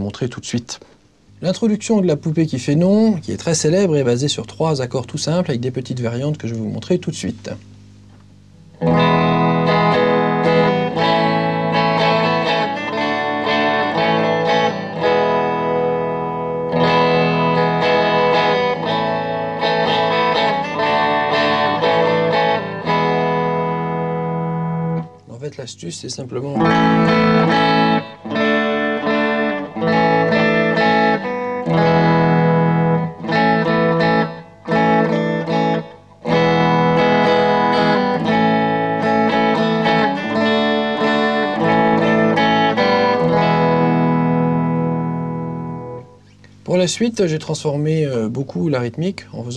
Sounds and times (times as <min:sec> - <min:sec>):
Electric guitar: 0:07.7 - 0:25.4, 0:26.5 - 0:46.7
Strum: 0:08.0 - 0:25.7, 0:26.3 - 0:46.7.